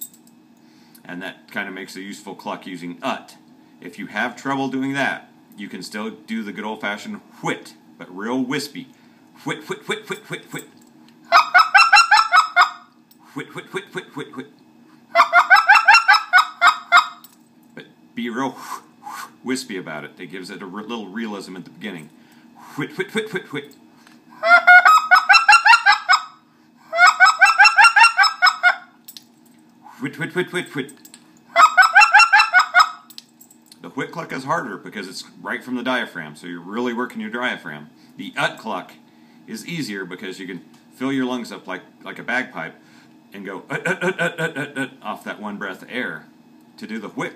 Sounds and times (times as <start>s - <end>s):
Speech: 1.0s - 10.7s, 13.3s - 14.5s, 17.8s - 18.6s, 19.4s - 22.1s, 22.8s - 23.7s, 30.0s - 31.0s, 33.8s - 43.8s, 44.8s - 47.3s.